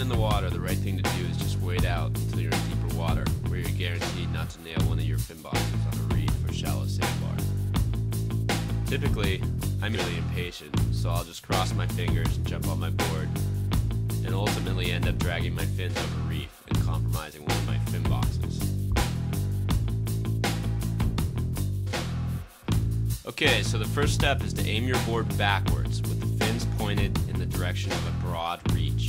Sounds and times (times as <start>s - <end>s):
Speech: 0.0s - 7.4s, 8.9s - 13.4s, 14.2s - 18.6s, 23.3s - 29.0s
Music: 0.0s - 29.0s.